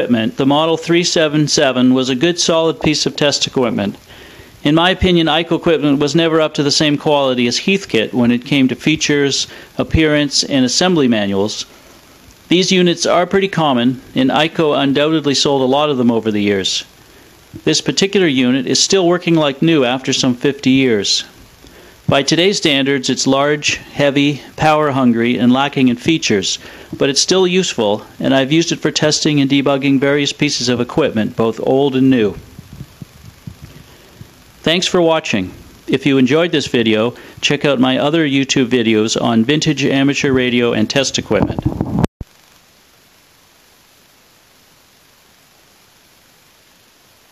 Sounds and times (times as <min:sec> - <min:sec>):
Speech: 0:00.0 - 0:04.0, 0:04.6 - 0:11.7, 0:12.5 - 0:16.9, 0:17.6 - 0:21.4, 0:22.1 - 0:32.5, 0:34.6 - 0:41.7.